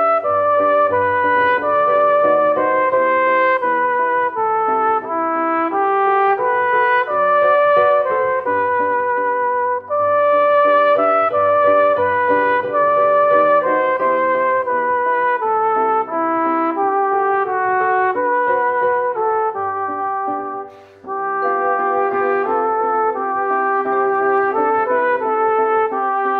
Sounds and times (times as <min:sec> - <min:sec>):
Trumpet: 0:00.0 - 0:26.3.